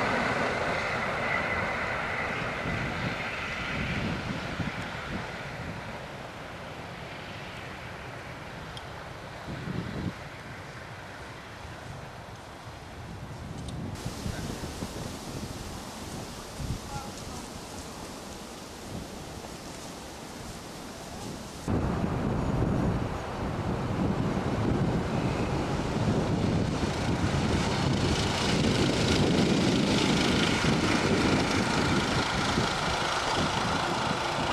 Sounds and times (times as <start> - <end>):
Railroad car, train wagon: 0.0 - 34.5
Train: 0.0 - 34.5.